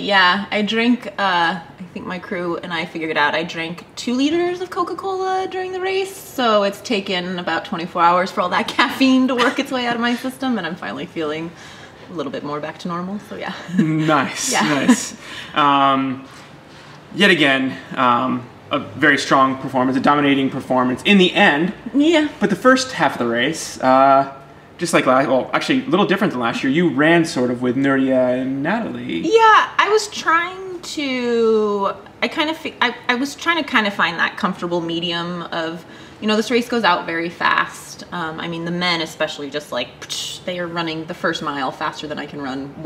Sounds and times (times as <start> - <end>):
Speech: 12.2 - 16.2, 17.2 - 42.8.